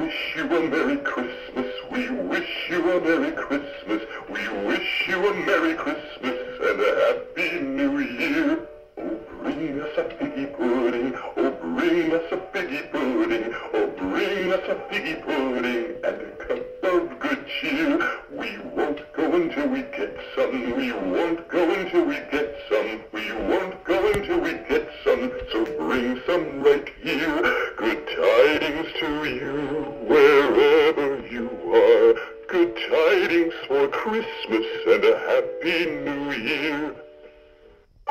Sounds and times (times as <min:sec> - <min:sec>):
Male singing: 0:00.0 - 0:37.1
Synthetic singing: 0:00.0 - 0:37.1
Music: 0:00.0 - 0:38.1.